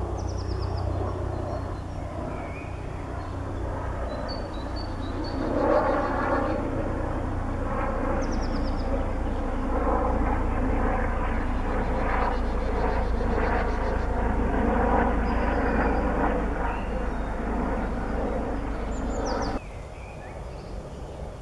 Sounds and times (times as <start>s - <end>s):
Bird: 0.1s - 6.7s, 8.1s - 9.4s, 15.0s - 21.4s.